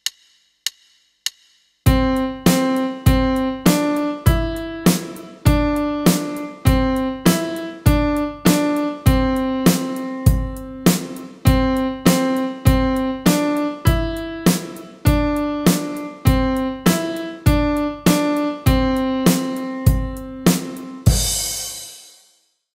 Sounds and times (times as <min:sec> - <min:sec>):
Music: 0:00.0 - 0:22.7.